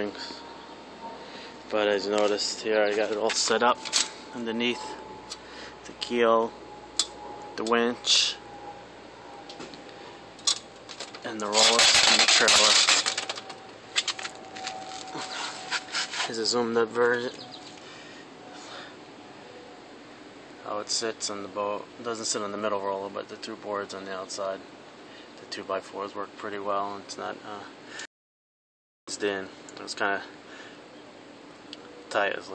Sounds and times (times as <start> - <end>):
Speech: 0.0 - 0.4, 1.7 - 5.0, 5.9 - 6.5, 7.6 - 8.4, 11.2 - 13.0, 16.2 - 17.4, 20.6 - 24.6, 25.4 - 27.8, 29.1 - 30.4, 32.1 - 32.5.